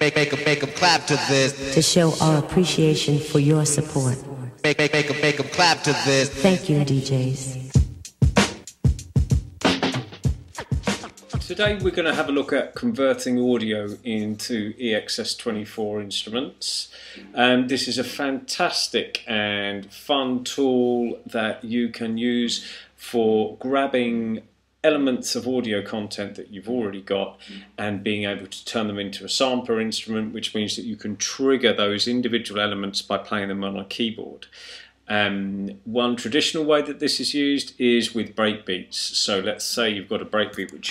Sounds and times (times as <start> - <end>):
Speech: 0.0 - 7.7, 11.4 - 40.9.